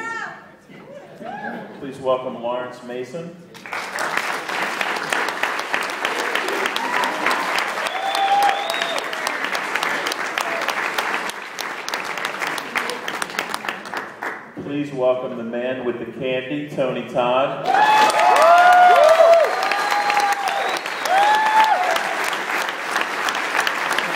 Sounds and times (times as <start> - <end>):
Speech: 1.8 - 3.4, 14.6 - 17.6.